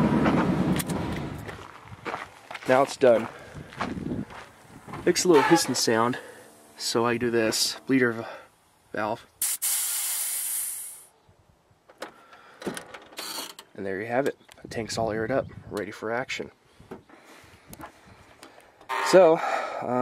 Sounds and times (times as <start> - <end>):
Speech: 2.6 - 3.3, 5.0 - 6.2, 6.8 - 9.3, 13.8 - 16.6, 19.0 - 20.0.